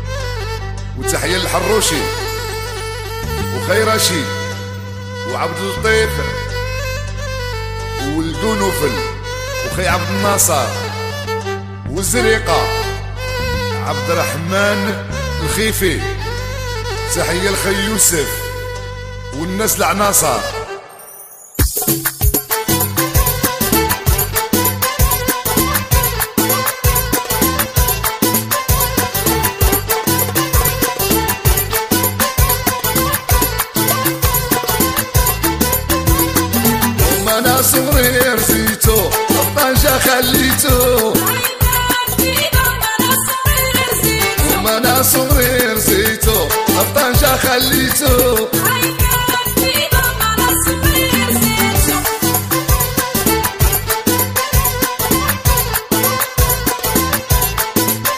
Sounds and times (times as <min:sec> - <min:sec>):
Music: 0:00.0 - 0:58.1
Speech: 0:01.0 - 0:02.3, 0:03.4 - 0:04.6, 0:05.3 - 0:06.5, 0:08.0 - 0:11.0, 0:11.9 - 0:13.0, 0:13.8 - 0:16.2, 0:17.1 - 0:18.6, 0:19.4 - 0:20.7.